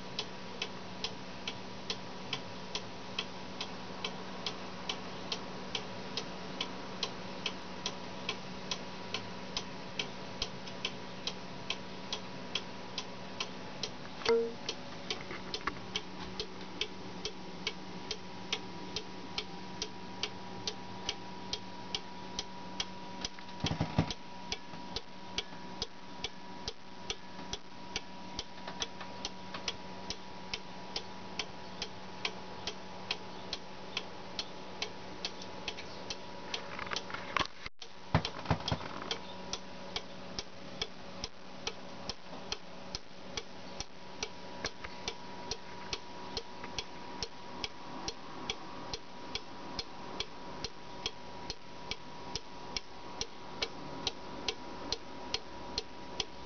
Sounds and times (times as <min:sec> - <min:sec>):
Tick-tock: 0:00.2 - 0:23.5, 0:24.1 - 0:37.1, 0:39.0 - 0:56.4.